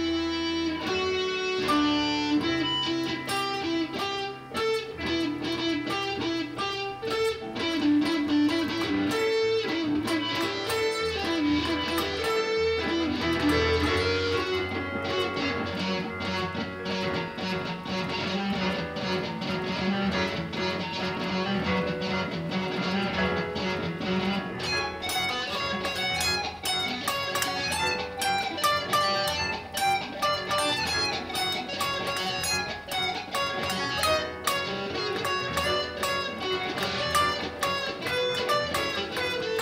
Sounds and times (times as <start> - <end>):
Electric guitar: 0.0 - 39.6.